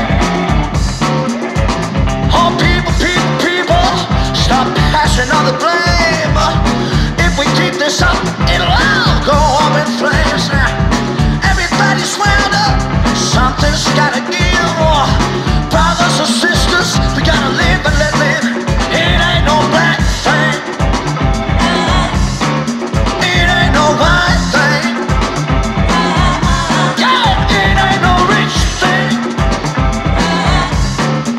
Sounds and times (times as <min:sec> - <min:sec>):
Psychedelic rock: 0:00.0 - 0:31.3.